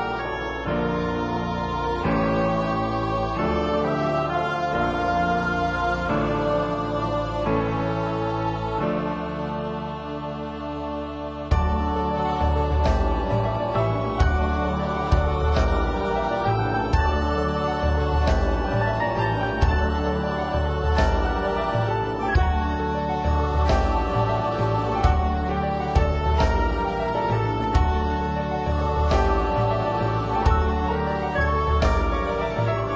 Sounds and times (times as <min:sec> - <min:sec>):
Music: 0:00.0 - 0:32.9.